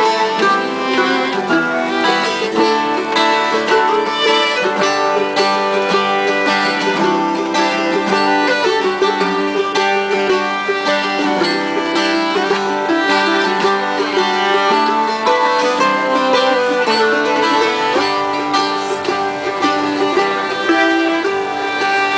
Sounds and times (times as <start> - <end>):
Acoustic guitar: 0.0 - 22.1
Bowed string instrument: 0.0 - 22.1
Country: 0.0 - 22.1.